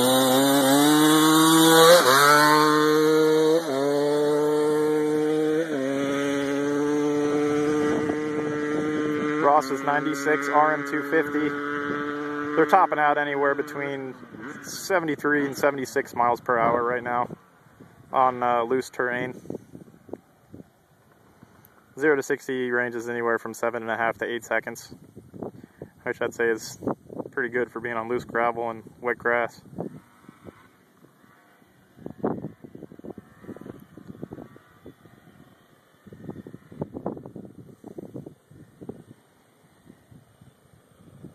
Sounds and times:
Vehicle: 0.0s - 41.3s
Speech: 9.4s - 11.6s, 12.6s - 17.4s, 18.1s - 19.4s, 22.0s - 25.0s, 26.0s - 26.8s, 27.4s - 29.6s.

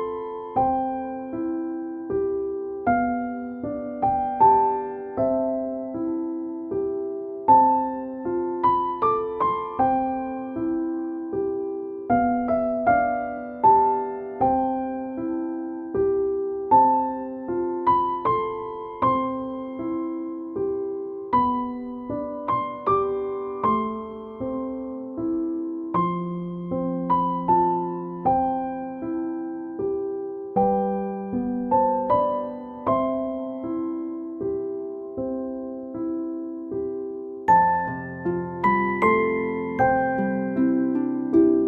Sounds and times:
Music: 0.0s - 41.6s.

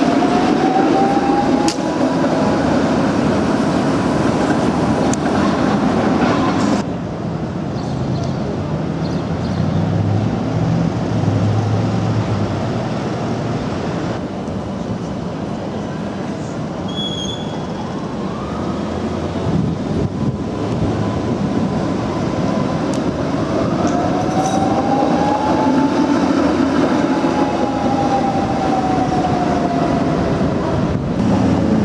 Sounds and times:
Railroad car, train wagon: 0.0s - 31.8s
Train: 0.0s - 31.8s.

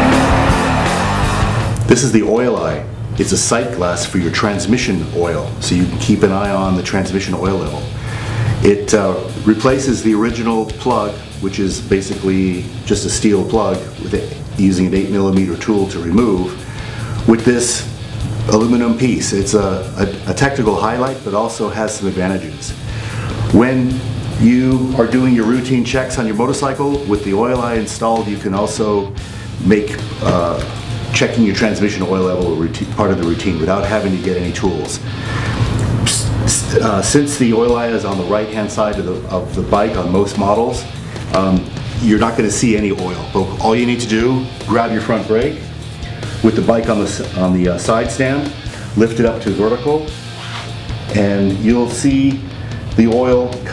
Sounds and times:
Music: 0.0s - 53.7s
Speech: 1.9s - 8.0s, 8.6s - 16.6s, 17.3s - 22.8s, 23.5s - 35.1s, 36.1s - 45.7s, 46.4s - 50.2s, 51.1s - 53.7s.

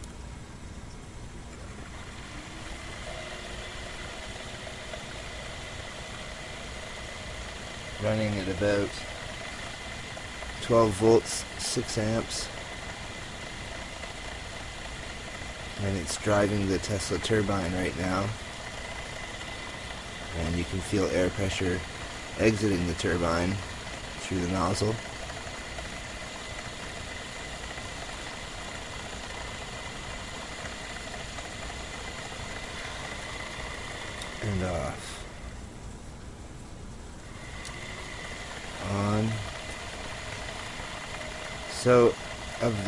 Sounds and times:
Speech: 8.0s - 9.1s, 10.6s - 12.5s, 15.8s - 18.4s, 20.3s - 23.6s, 24.2s - 25.0s, 34.4s - 35.3s, 38.8s - 39.5s, 41.7s - 42.8s.

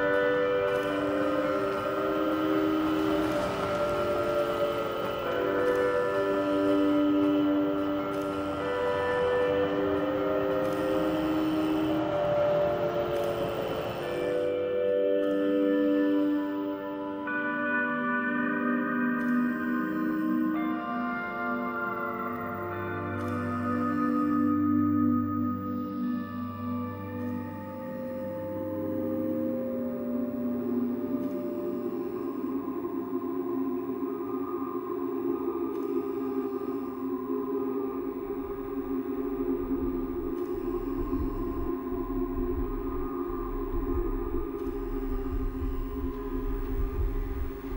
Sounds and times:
Music: 0.0s - 47.7s.

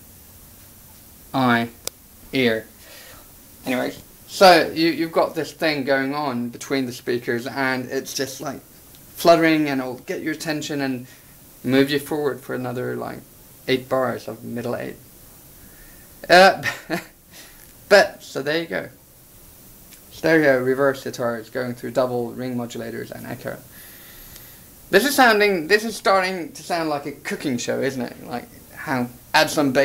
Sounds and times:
Speech: 1.4s - 2.7s, 3.6s - 8.6s, 9.2s - 15.0s, 16.2s - 16.7s, 17.9s - 19.0s, 20.1s - 23.7s, 24.9s - 29.8s.

